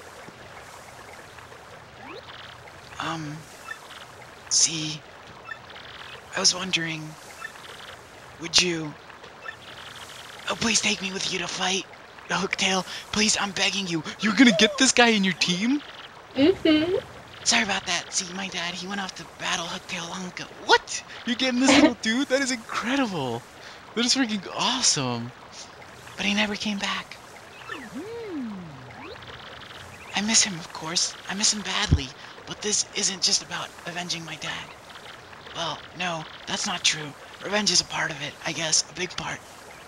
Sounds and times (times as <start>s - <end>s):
Speech: 2.9s - 3.4s, 4.6s - 5.0s, 6.3s - 7.2s, 8.4s - 9.0s, 10.5s - 15.8s, 16.4s - 27.2s, 27.8s - 29.0s, 30.2s - 34.7s, 35.6s - 39.4s.